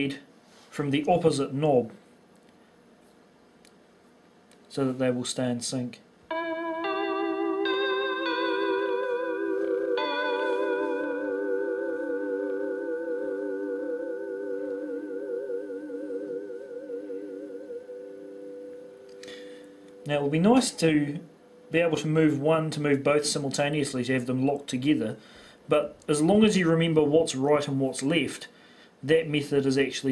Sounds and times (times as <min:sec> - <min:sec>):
Speech: 0:00.0 - 0:02.0, 0:04.7 - 0:06.1, 0:20.1 - 0:30.1.